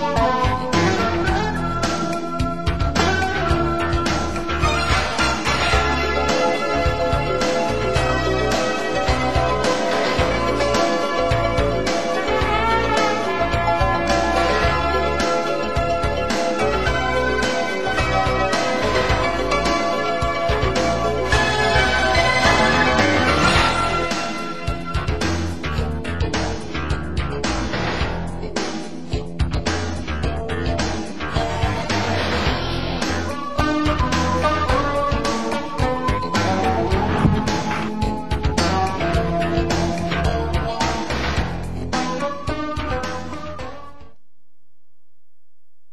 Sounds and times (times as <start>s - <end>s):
Music: 0.0s - 44.3s.